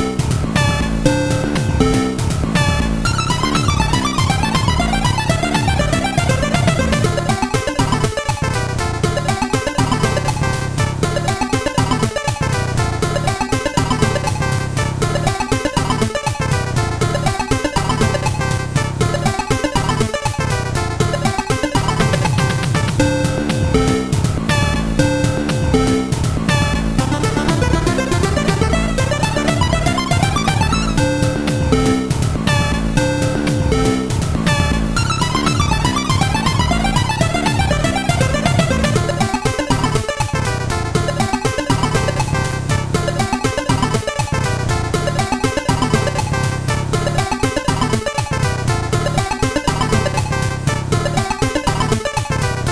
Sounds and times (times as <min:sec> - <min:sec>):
Video game music: 0:00.0 - 0:52.7.